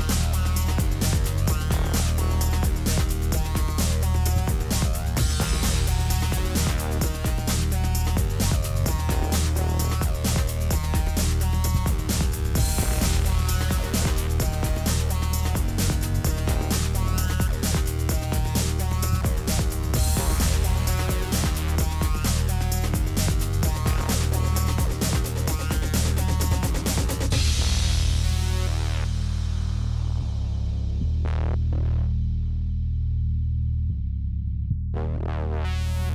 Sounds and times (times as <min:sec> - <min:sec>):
Music: 0:00.0 - 0:36.1.